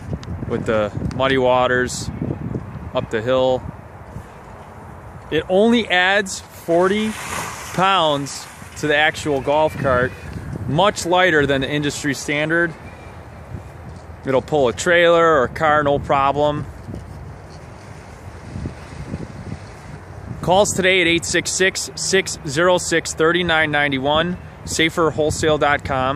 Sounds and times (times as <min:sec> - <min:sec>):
Speech: 0:00.5 - 0:02.1, 0:03.0 - 0:03.6, 0:05.3 - 0:12.8, 0:14.3 - 0:16.7, 0:20.4 - 0:26.1.